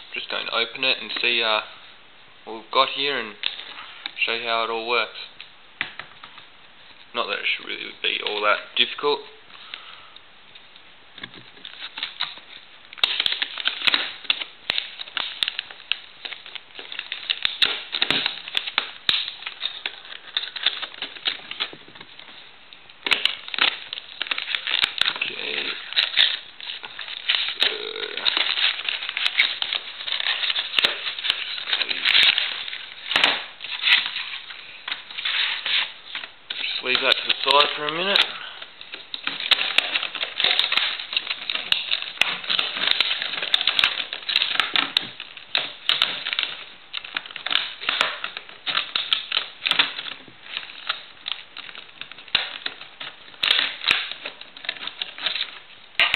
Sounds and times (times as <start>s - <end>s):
Speech: 0.1s - 1.8s, 2.4s - 3.4s, 4.2s - 5.3s, 7.1s - 9.4s, 25.1s - 25.9s, 27.6s - 28.3s, 36.8s - 38.5s.